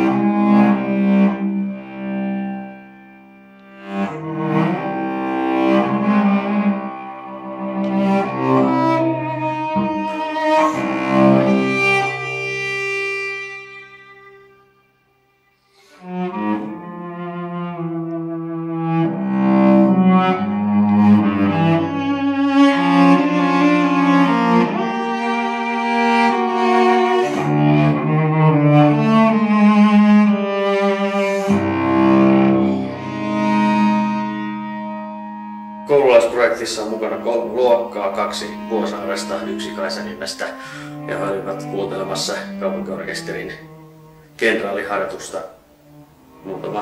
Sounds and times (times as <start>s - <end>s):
Double bass: 0.0s - 14.5s, 15.9s - 46.8s
Cello: 0.0s - 46.8s
Classical music: 0.0s - 46.8s.